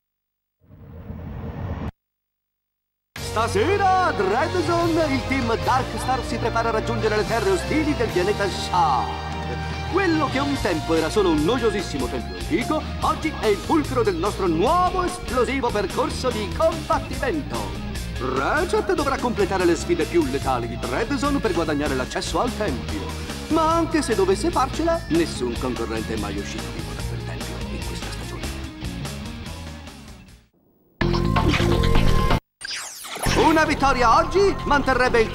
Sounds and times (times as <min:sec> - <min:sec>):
Music: 0:03.2 - 0:32.4, 0:33.3 - 0:35.3
Speech: 0:03.3 - 0:09.2, 0:09.9 - 0:28.6, 0:33.3 - 0:35.3.